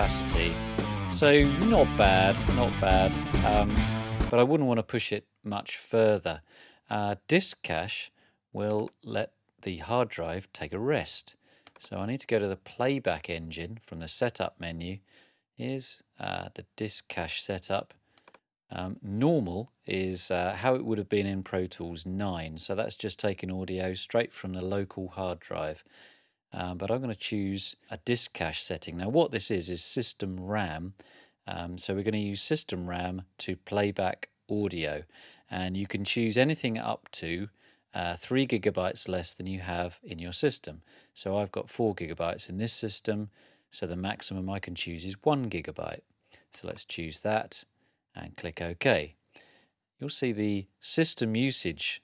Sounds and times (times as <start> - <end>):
Speech: 0.0 - 18.0, 18.7 - 25.9, 26.5 - 49.2, 50.0 - 52.0.